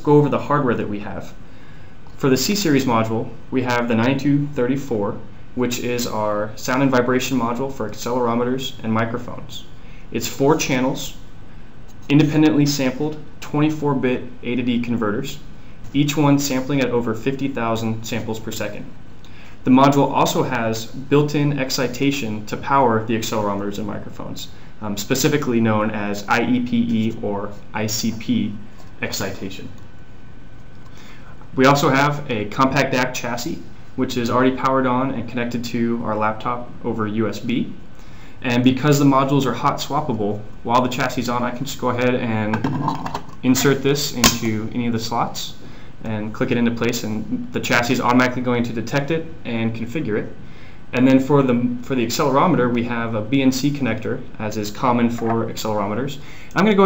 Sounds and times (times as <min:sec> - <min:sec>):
Speech: 0:00.0 - 0:01.4, 0:02.2 - 0:11.2, 0:12.0 - 0:18.9, 0:19.6 - 0:29.8, 0:31.5 - 0:37.8, 0:38.4 - 0:42.8, 0:43.4 - 0:56.8.